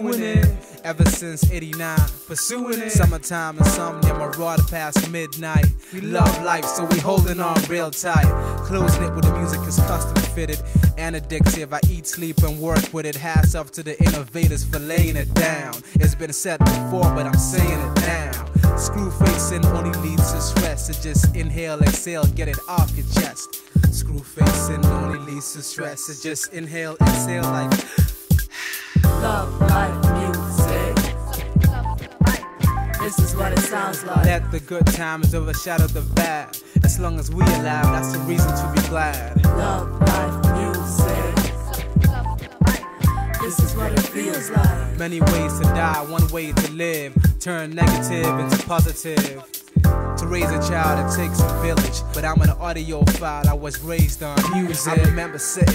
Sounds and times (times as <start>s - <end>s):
Music: 0.0s - 55.7s.